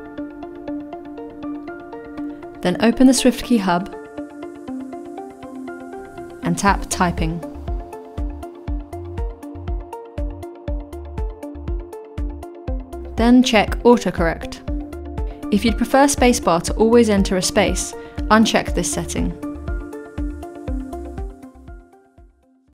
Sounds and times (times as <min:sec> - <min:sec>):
Music: 0:00.0 - 0:22.7
Speech: 0:02.6 - 0:03.9, 0:06.4 - 0:07.4, 0:13.2 - 0:14.6, 0:15.5 - 0:19.4.